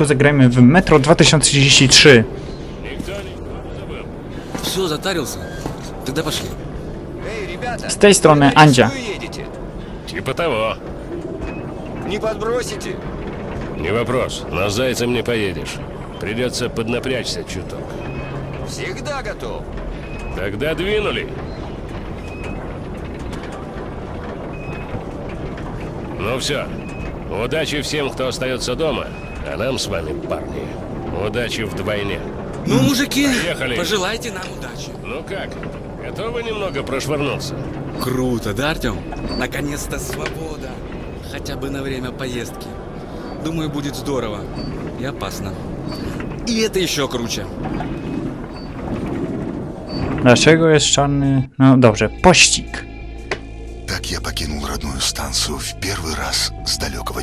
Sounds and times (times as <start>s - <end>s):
Speech: 27.3s - 42.6s, 53.9s - 57.2s.